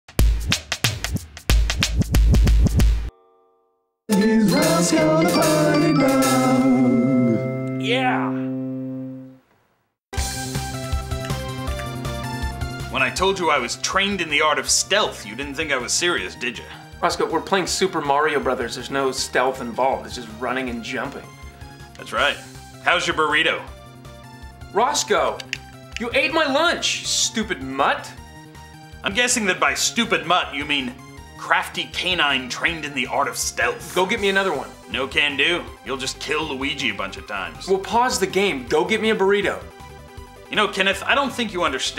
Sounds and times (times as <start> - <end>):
Music for children: 4.1 - 9.4.